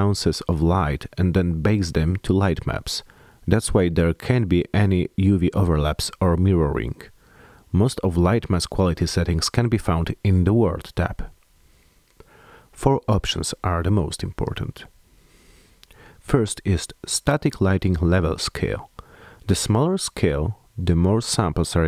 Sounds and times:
Speech: 0.0 - 11.4, 12.8 - 14.9, 16.2 - 21.8.

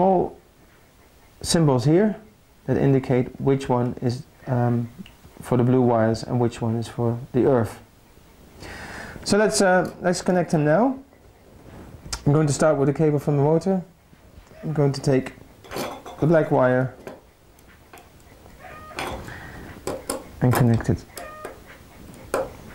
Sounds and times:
Inside, small room: 0.0 - 22.7
Speech: 1.4 - 7.9, 9.2 - 11.0, 12.2 - 13.9, 14.6 - 15.4, 16.2 - 17.0, 20.4 - 21.1.

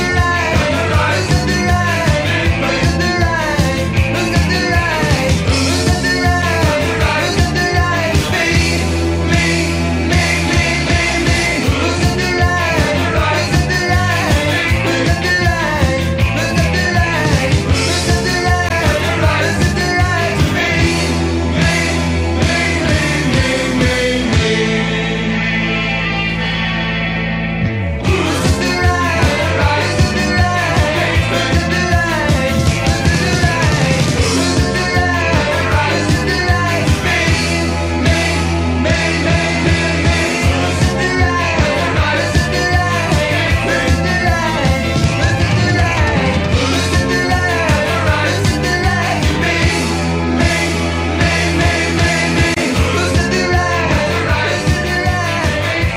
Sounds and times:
Singing: 0.0 - 25.2, 28.0 - 55.9
Rock music: 0.0 - 55.9.

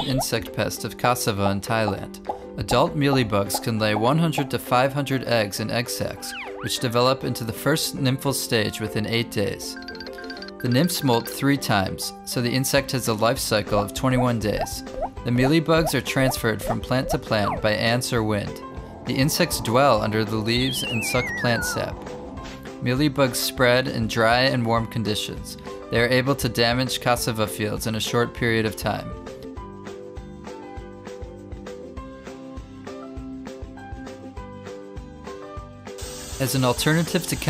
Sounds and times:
Speech: 0.0 - 9.8, 10.6 - 22.0, 22.8 - 29.2, 36.4 - 37.4.

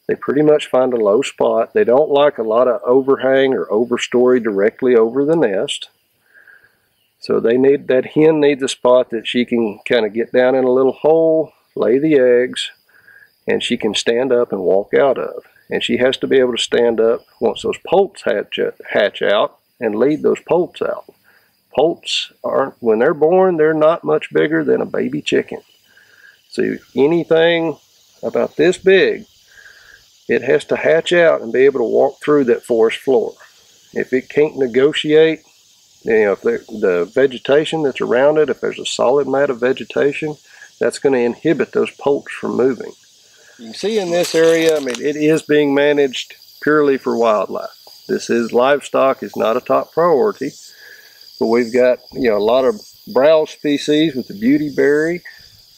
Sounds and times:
Speech: 0.1 - 5.9, 7.2 - 12.8, 13.5 - 21.1, 21.8 - 25.6, 26.5 - 29.3, 30.3 - 33.4, 34.0 - 35.4, 36.1 - 43.0, 43.6 - 50.6, 51.4 - 55.4.

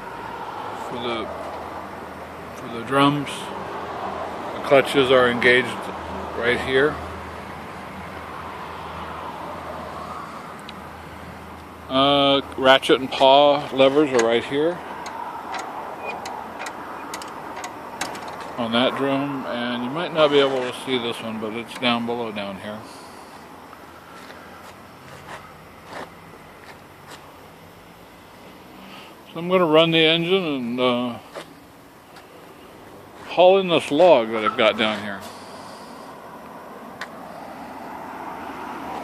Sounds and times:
Speech: 0.8 - 1.3, 2.6 - 3.5, 4.6 - 7.0, 11.9 - 14.8, 18.6 - 22.9, 29.3 - 31.3, 33.3 - 35.3.

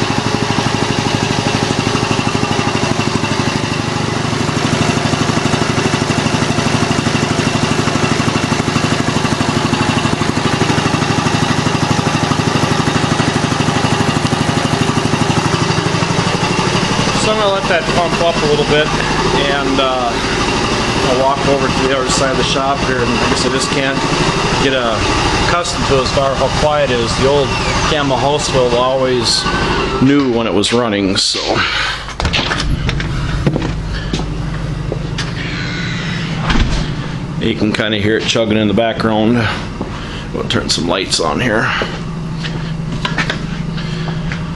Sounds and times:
Speech: 17.2 - 20.2, 21.0 - 31.8, 37.4 - 39.6, 40.3 - 41.9.

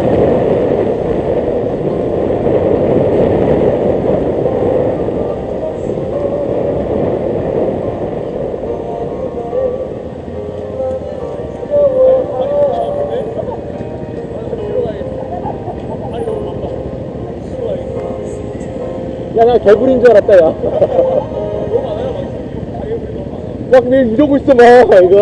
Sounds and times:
Motorcycle: 0.0 - 25.2
Music: 8.7 - 22.4.

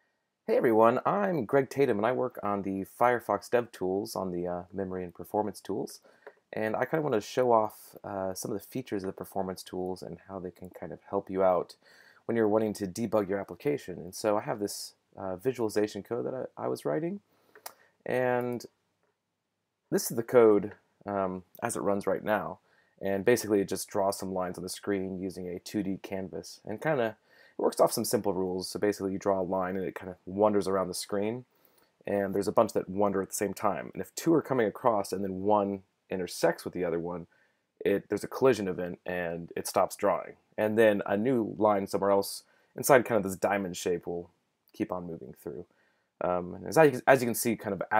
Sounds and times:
Speech: 0.5 - 17.2, 18.1 - 18.8, 19.9 - 31.5, 32.1 - 47.9.

